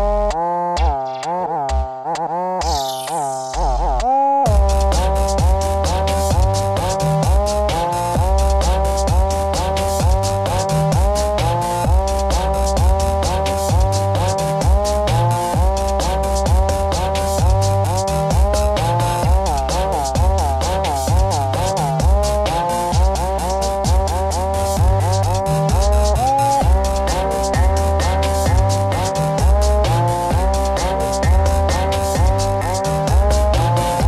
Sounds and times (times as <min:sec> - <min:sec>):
Music: 0:00.0 - 0:34.0.